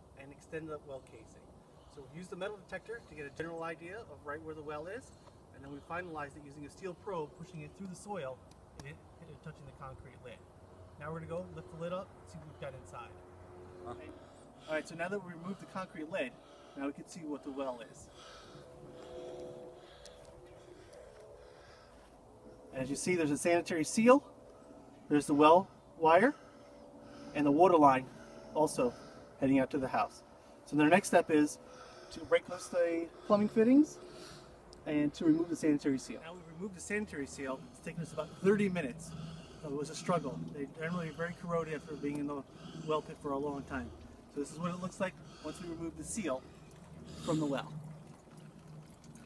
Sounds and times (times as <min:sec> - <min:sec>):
Speech: 0:00.2 - 0:01.4, 0:02.0 - 0:10.4, 0:11.0 - 0:13.1, 0:22.8 - 0:24.3, 0:34.9 - 0:39.1, 0:39.7 - 0:46.4, 0:47.3 - 0:47.7.